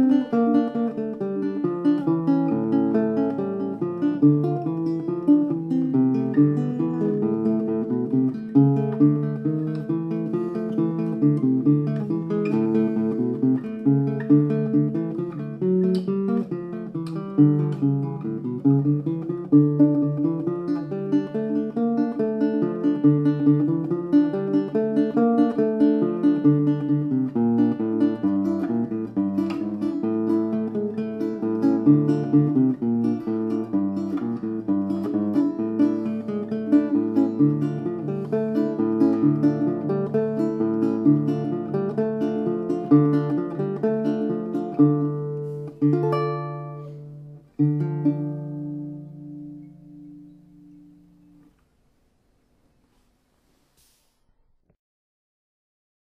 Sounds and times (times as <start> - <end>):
Guitar: 0.0 - 53.7.